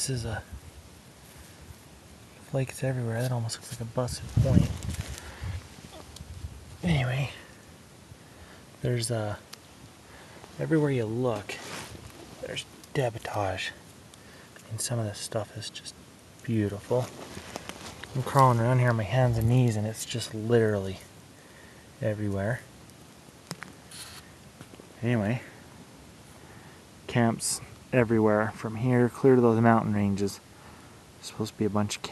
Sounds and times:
Speech: 0.0s - 0.5s, 2.4s - 4.8s, 6.8s - 7.5s, 8.8s - 9.5s, 10.6s - 11.8s, 12.4s - 13.8s, 14.6s - 17.2s, 18.1s - 21.1s, 22.0s - 22.7s, 25.0s - 25.6s, 27.1s - 30.4s, 31.2s - 32.1s.

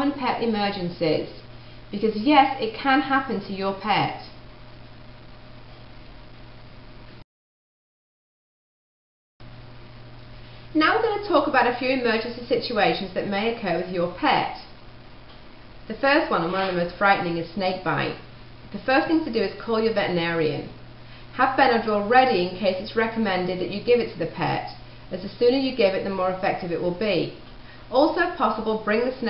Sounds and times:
Speech: 0.0s - 1.4s, 2.0s - 4.4s, 10.8s - 14.7s, 15.9s - 20.8s, 21.4s - 29.2s.

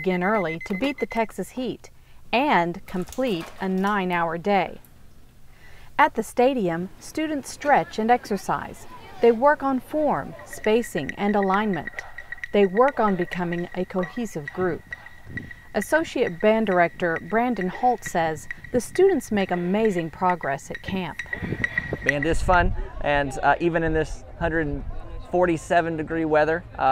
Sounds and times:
Speech: 6.0s - 12.0s, 12.6s - 14.8s.

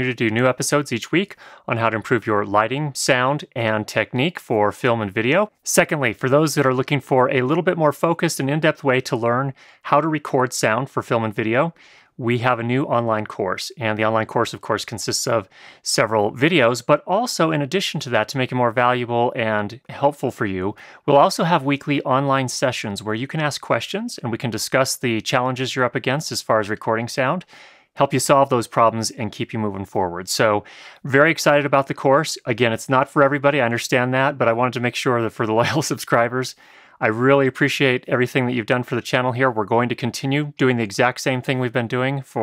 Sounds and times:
Speech: 0.0s - 42.4s.

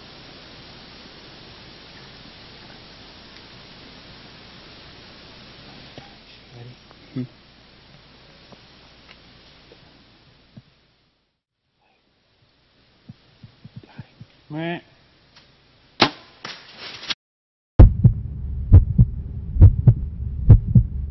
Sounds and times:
Speech: 6.0s - 7.3s, 13.8s - 15.0s.

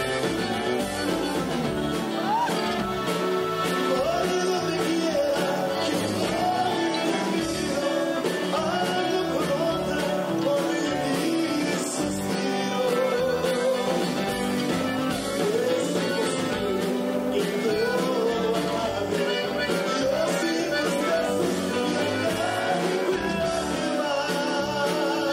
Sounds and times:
Country: 0.0s - 25.3s
Singing: 1.3s - 25.3s.

